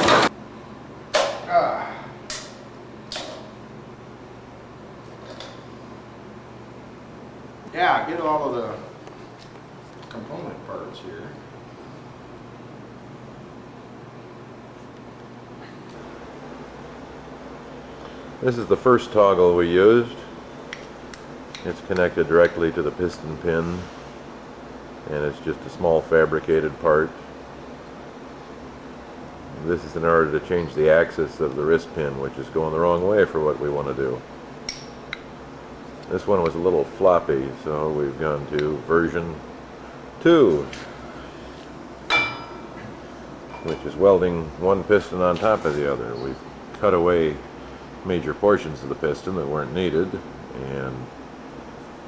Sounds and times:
Speech: 0:07.7 - 0:09.0, 0:10.1 - 0:11.4, 0:18.4 - 0:20.3, 0:21.6 - 0:23.9, 0:25.1 - 0:27.2, 0:29.5 - 0:34.2, 0:36.1 - 0:39.4, 0:40.2 - 0:40.8, 0:43.6 - 0:47.4, 0:48.0 - 0:51.1.

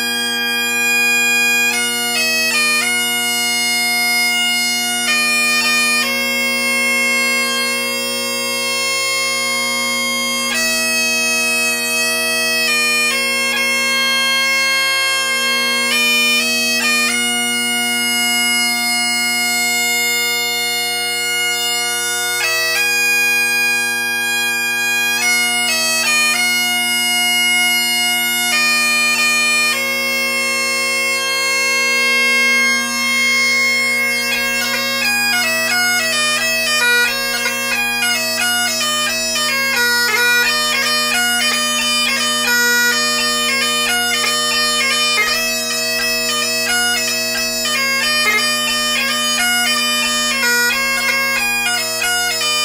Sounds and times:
Music: 0:00.0 - 0:52.6.

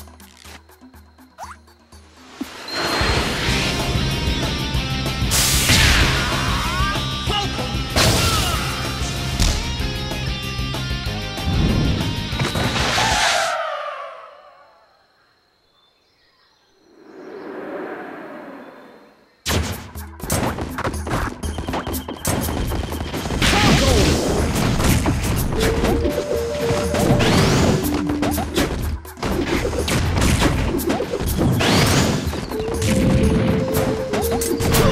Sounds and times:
Music: 0:00.0 - 0:13.0, 0:19.5 - 0:34.9
Speech: 0:06.4 - 0:08.6, 0:23.5 - 0:24.2.

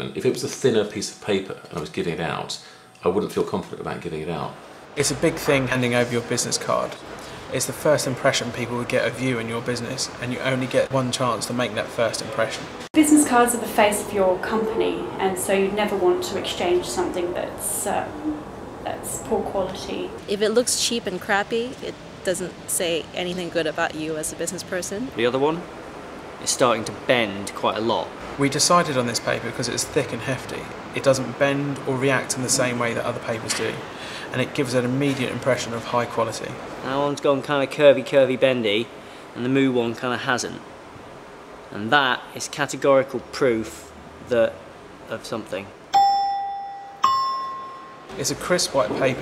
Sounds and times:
Speech: 0:00.0 - 0:25.6, 0:26.4 - 0:40.6, 0:41.8 - 0:45.7, 0:48.2 - 0:49.2.

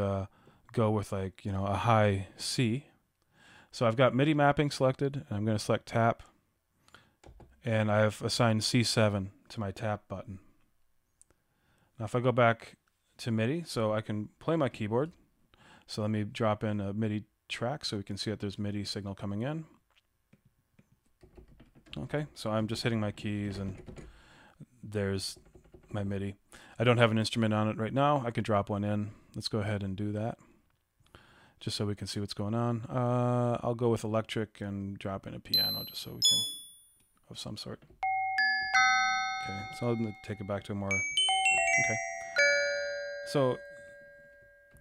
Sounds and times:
Glockenspiel: 0:35.6 - 0:36.9, 0:38.0 - 0:44.8.

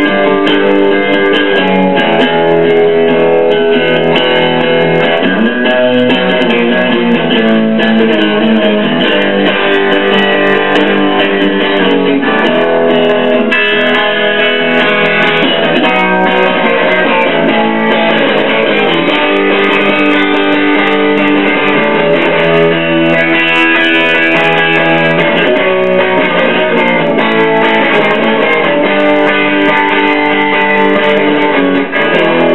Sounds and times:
Electric guitar: 0:00.0 - 0:32.5.

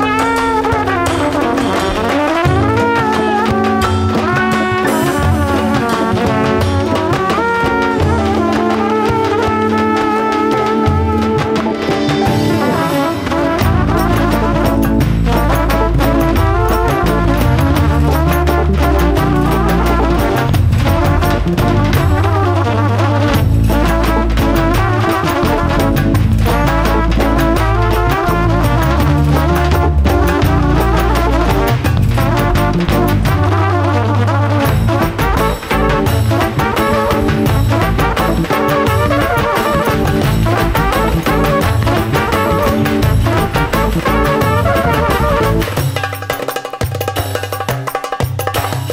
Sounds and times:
Trumpet: 0:00.0 - 0:48.9.

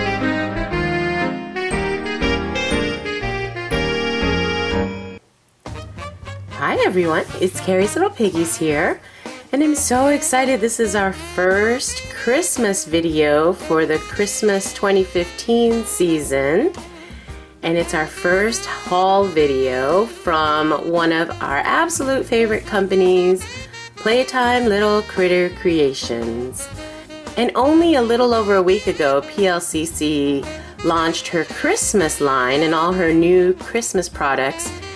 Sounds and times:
Music: 0:00.0 - 0:34.9
Speech: 0:06.6 - 0:16.8, 0:17.6 - 0:26.7, 0:27.4 - 0:34.8.

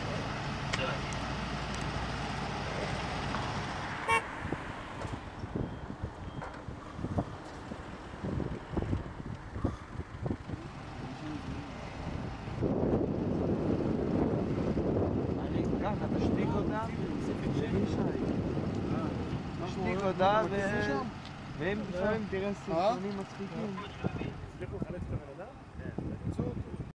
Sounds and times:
Truck: 0:00.0 - 0:26.9.

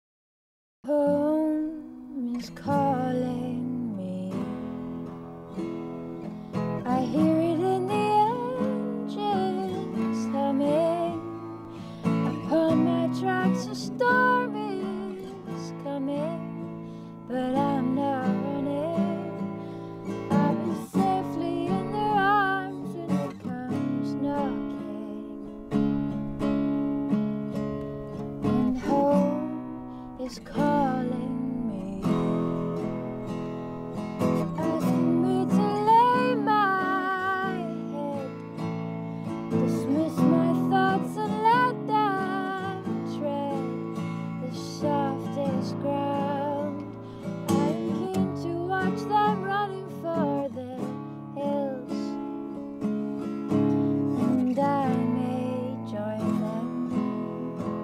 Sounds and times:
Music: 0:00.9 - 0:57.8.

